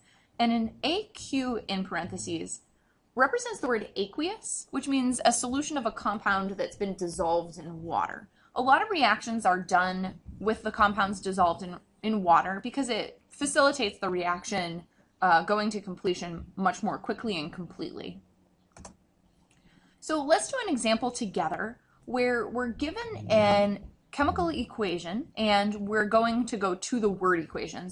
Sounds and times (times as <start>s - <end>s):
Speech: 0.4s - 2.6s, 3.2s - 18.2s, 20.0s - 27.9s.